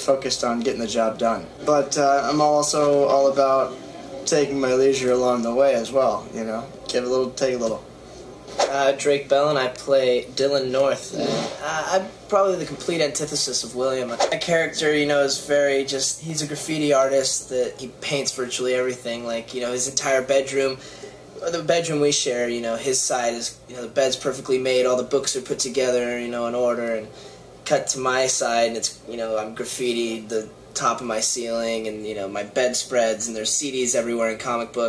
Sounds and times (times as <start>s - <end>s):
Speech: 0.0s - 7.9s, 8.6s - 34.8s.